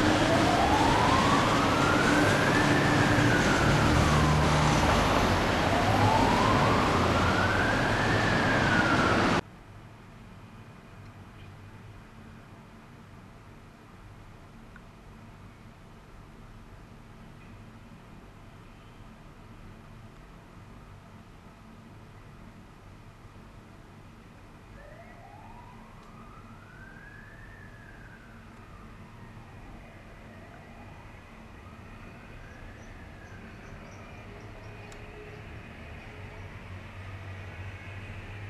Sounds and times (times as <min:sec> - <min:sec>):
Police car (siren): 0:00.0 - 0:09.4, 0:24.8 - 0:38.4.